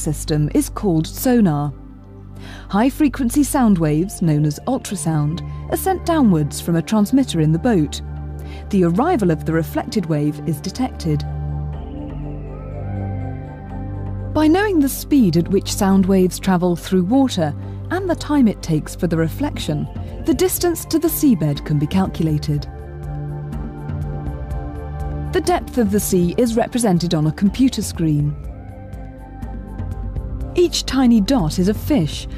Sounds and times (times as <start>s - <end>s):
Speech: 0.0s - 1.8s, 2.7s - 8.0s, 8.7s - 11.3s, 14.4s - 22.7s, 25.4s - 28.4s, 30.6s - 32.3s
Music: 0.0s - 32.3s.